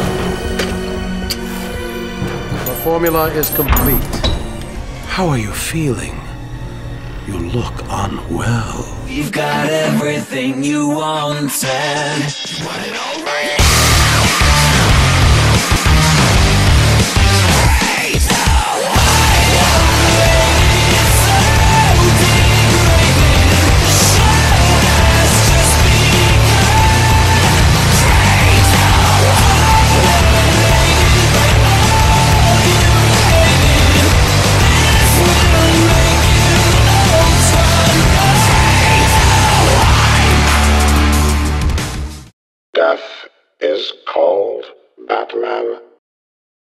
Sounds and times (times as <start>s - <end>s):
Exciting music: 0.0s - 10.7s, 13.5s - 42.3s
Speech: 2.7s - 4.0s, 5.1s - 6.3s, 7.2s - 9.7s, 42.8s - 46.0s.